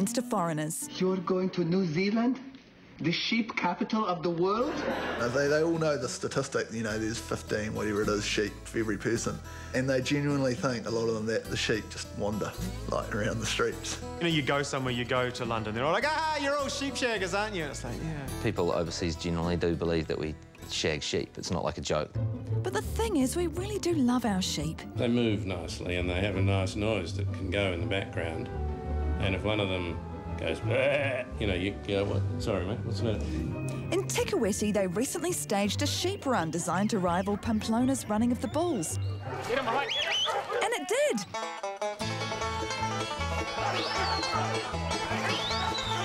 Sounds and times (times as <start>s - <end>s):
Music: 0.0s - 46.0s.